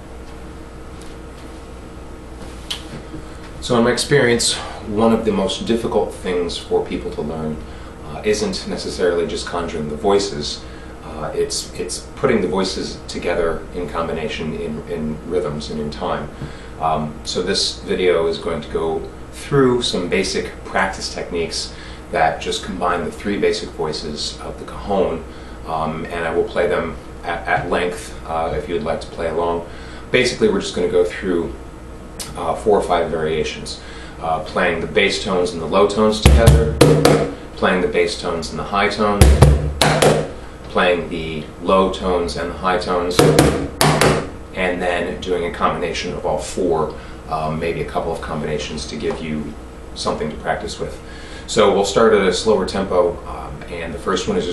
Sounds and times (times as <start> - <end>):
Speech: 3.6 - 31.6, 32.2 - 36.8, 37.6 - 40.1, 40.7 - 43.4, 44.5 - 54.5.